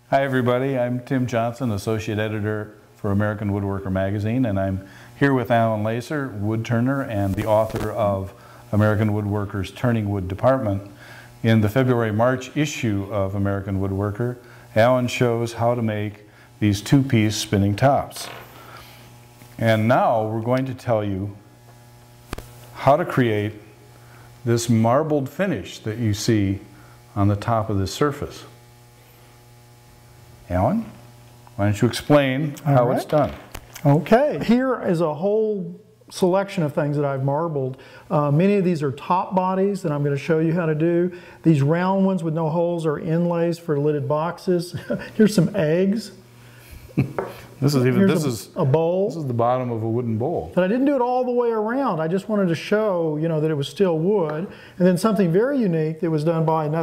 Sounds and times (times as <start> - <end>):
Speech: 0.1 - 18.3, 19.6 - 21.4, 22.8 - 23.7, 24.5 - 28.6, 30.5 - 31.0, 31.6 - 46.2, 47.6 - 56.8.